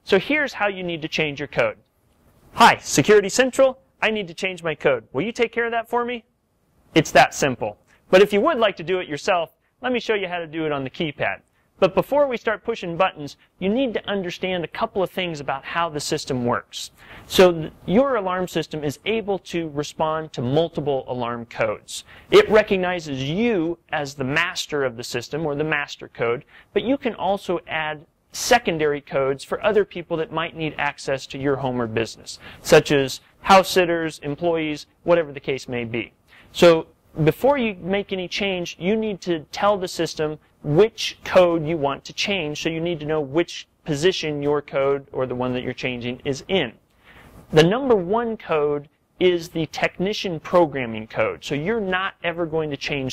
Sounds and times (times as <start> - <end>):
Speech: 0.0 - 1.8, 2.6 - 6.3, 7.0 - 46.8, 47.5 - 53.1.